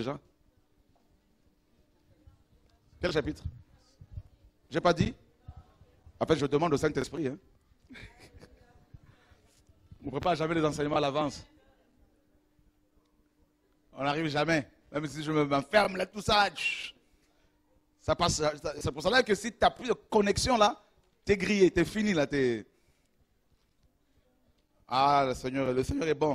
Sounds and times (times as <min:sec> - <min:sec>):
Speech: 0:14.0 - 0:17.0, 0:24.9 - 0:26.3.